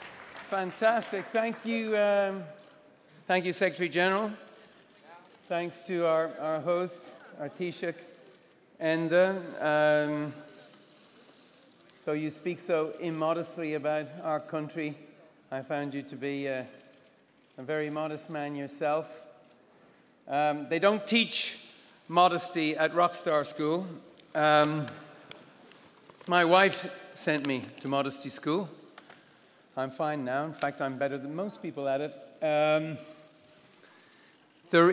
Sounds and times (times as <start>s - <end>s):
Narration, monologue: 0.0s - 34.9s
Male speech, man speaking: 0.5s - 2.6s, 3.3s - 4.5s, 5.5s - 8.1s, 8.8s - 10.5s, 12.0s - 16.8s, 17.6s - 19.3s, 20.3s - 25.1s, 26.3s - 28.8s, 29.8s - 33.1s, 34.7s - 34.9s.